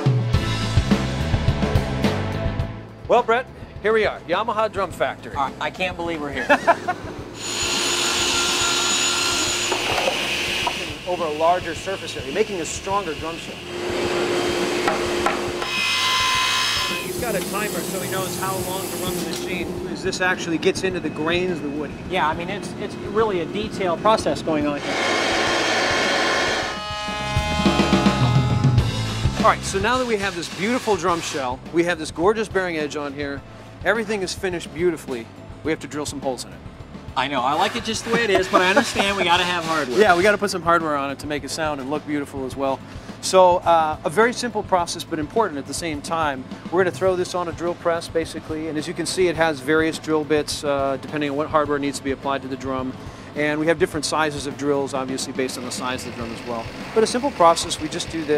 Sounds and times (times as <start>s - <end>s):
Music: 0.0s - 58.3s
Speech: 3.1s - 6.5s, 10.8s - 13.6s, 17.0s - 24.8s, 29.4s - 36.6s, 37.2s - 58.3s.